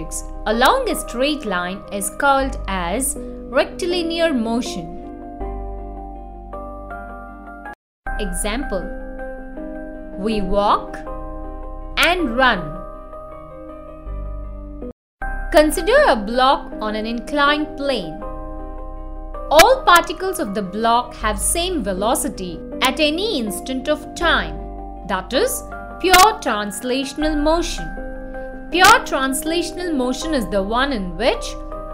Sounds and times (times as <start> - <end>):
Speech: 0.0 - 5.0, 8.2 - 8.9, 10.2 - 11.0, 12.0 - 12.8, 15.6 - 18.2, 19.5 - 28.0, 28.8 - 31.6.